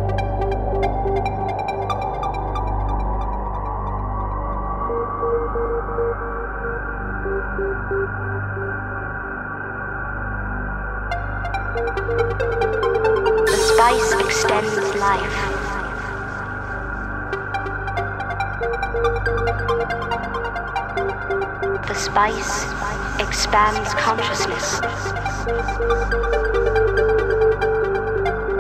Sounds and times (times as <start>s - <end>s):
Music: 0.0s - 28.6s
Speech: 13.5s - 16.1s, 21.8s - 25.5s.